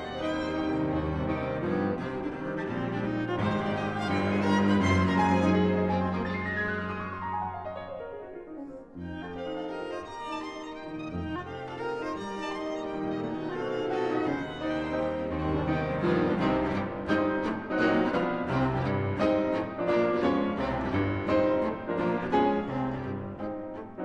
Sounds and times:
Violin, fiddle: 0:00.0 - 0:07.2, 0:09.0 - 0:24.0
Cello: 0:00.0 - 0:24.0.

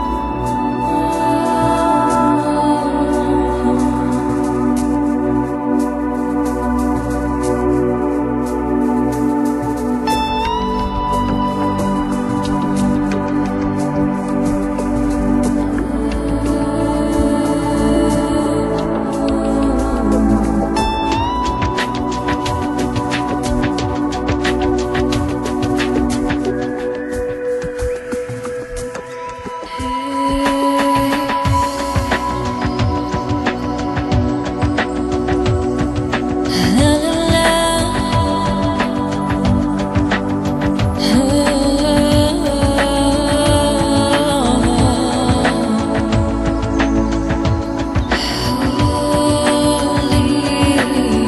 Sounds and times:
Trance music: 0:00.0 - 0:51.2.

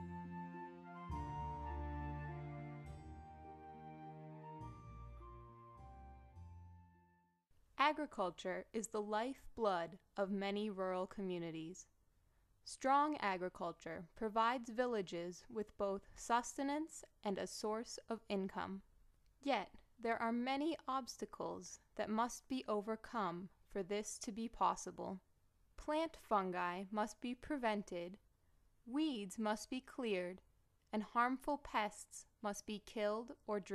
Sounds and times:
Speech: 0:07.8 - 0:11.9, 0:12.7 - 0:25.2, 0:25.8 - 0:28.2, 0:28.9 - 0:33.7.

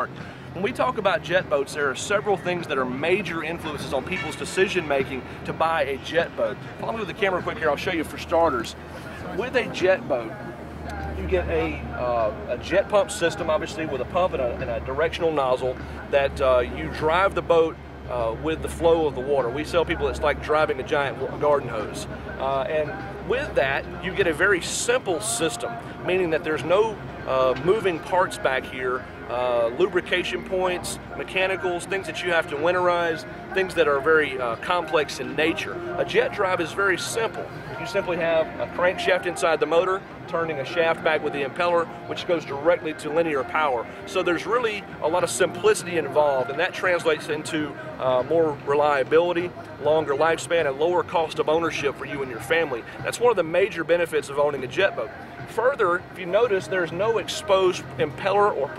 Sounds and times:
Speech: 0:00.0 - 0:58.7.

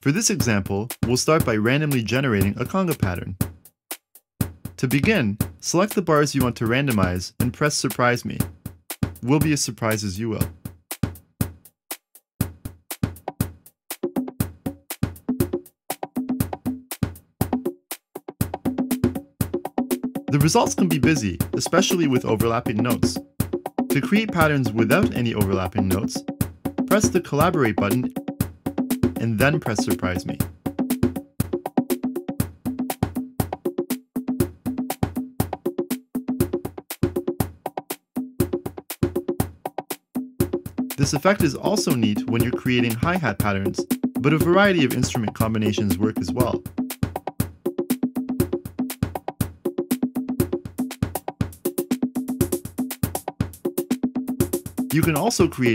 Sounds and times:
Speech: 0:00.0 - 0:03.4, 0:04.8 - 0:08.5, 0:09.2 - 0:10.5, 0:20.3 - 0:23.2, 0:23.9 - 0:26.2, 0:26.9 - 0:28.1, 0:29.2 - 0:30.4, 0:41.0 - 0:46.6, 0:54.9 - 0:55.7
Music: 0:00.0 - 0:55.7.

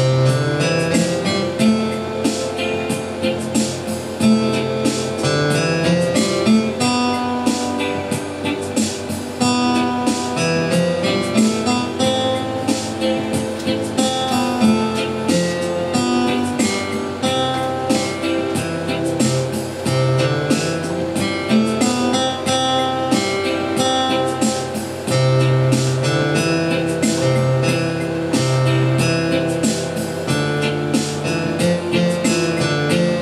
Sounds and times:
Sad music: 0:00.0 - 0:33.2.

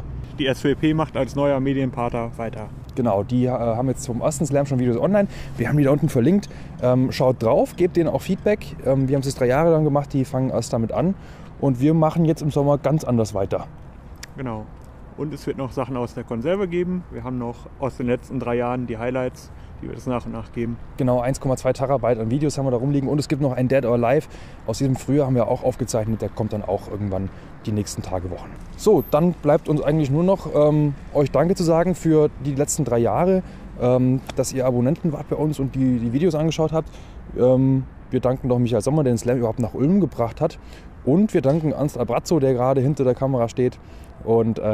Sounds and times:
Speech: 0:00.4 - 0:13.7, 0:14.3 - 0:44.7.

